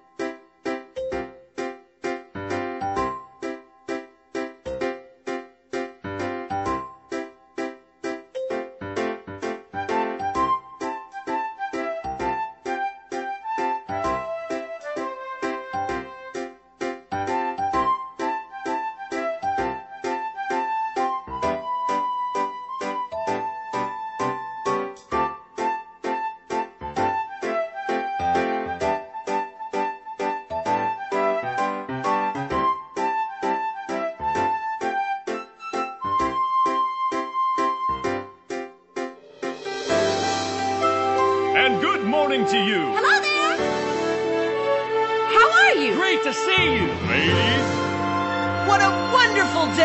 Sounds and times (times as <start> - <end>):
Music: 0.0 - 49.8.